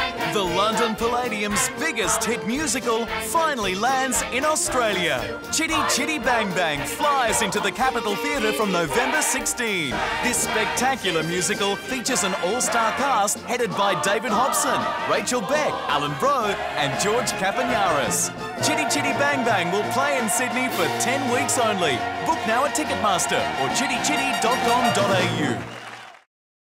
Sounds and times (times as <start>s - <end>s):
Music: 0.0s - 26.3s
Speech: 0.3s - 25.6s.